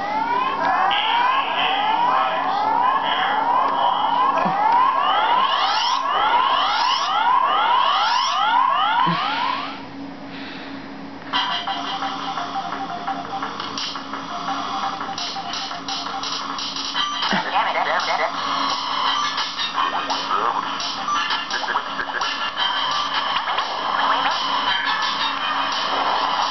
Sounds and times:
Music: 11.3s - 26.5s.

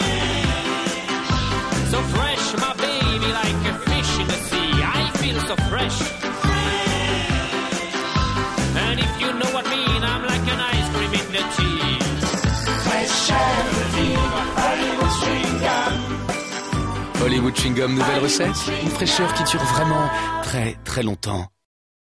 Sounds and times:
Music: 0.0s - 21.4s
Speech: 17.2s - 21.6s.

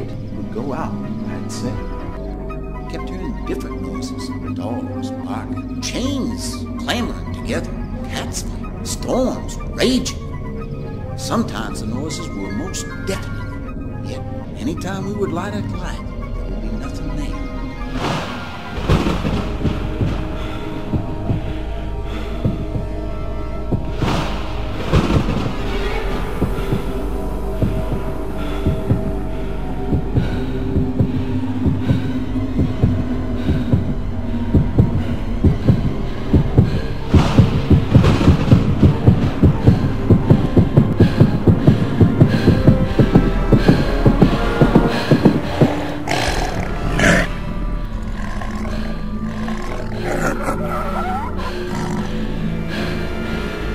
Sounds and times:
Music: 0.0s - 53.7s.

